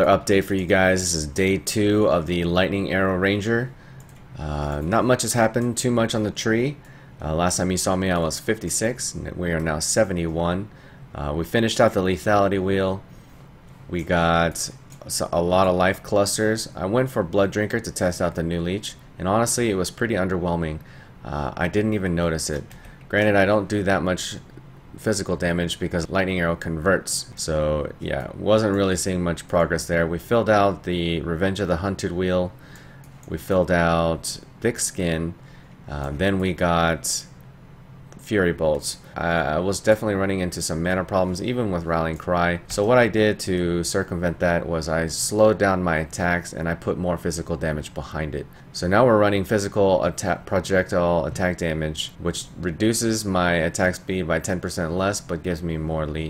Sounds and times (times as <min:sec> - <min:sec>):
Speech: 0:00.0 - 0:03.8, 0:04.4 - 0:13.1, 0:13.9 - 0:32.6, 0:33.2 - 0:37.4, 0:38.2 - 0:56.3.